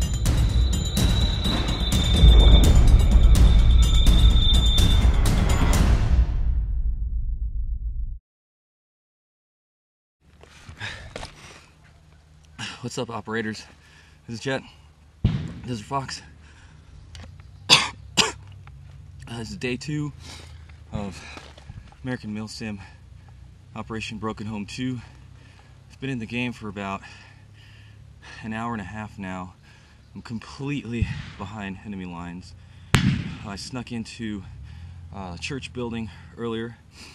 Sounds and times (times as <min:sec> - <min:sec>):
Silence: 0:00.0 - 0:08.2
Speech: 0:12.8 - 0:13.7, 0:14.3 - 0:14.8, 0:15.6 - 0:16.3, 0:19.2 - 0:20.2, 0:20.9 - 0:21.2, 0:22.0 - 0:23.0, 0:23.8 - 0:25.1, 0:25.9 - 0:27.1, 0:28.4 - 0:29.6, 0:30.2 - 0:32.5, 0:33.4 - 0:36.8.